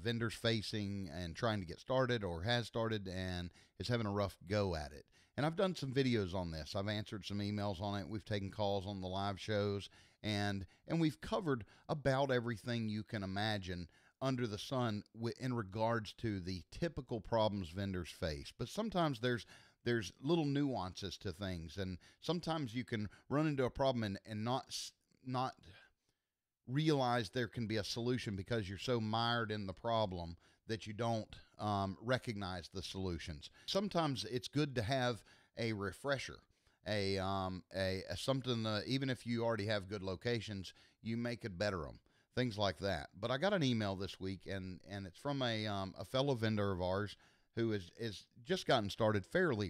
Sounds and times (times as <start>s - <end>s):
Speech: 0.0s - 25.8s, 26.7s - 49.7s.